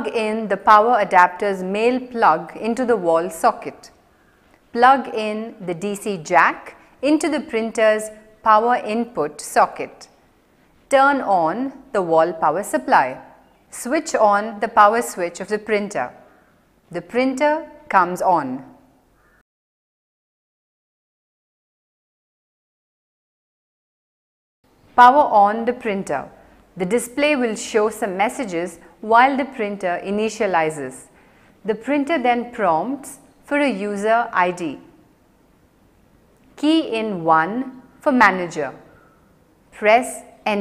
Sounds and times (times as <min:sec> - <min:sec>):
Speech: 0:00.0 - 0:04.0, 0:04.7 - 0:10.1, 0:10.9 - 0:16.2, 0:16.9 - 0:18.7, 0:25.0 - 0:31.1, 0:31.7 - 0:35.0, 0:36.6 - 0:38.9, 0:39.8 - 0:40.6.